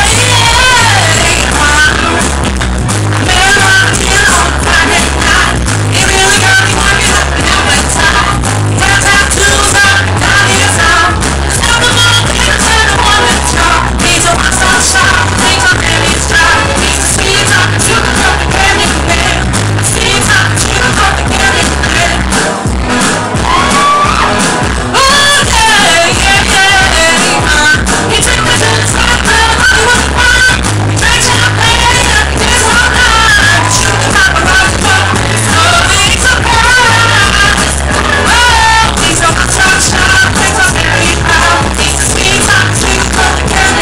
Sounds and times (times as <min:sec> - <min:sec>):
Female singing: 0:00.0 - 0:02.3, 0:03.2 - 0:22.3, 0:25.0 - 0:43.8
Music: 0:00.0 - 0:43.8.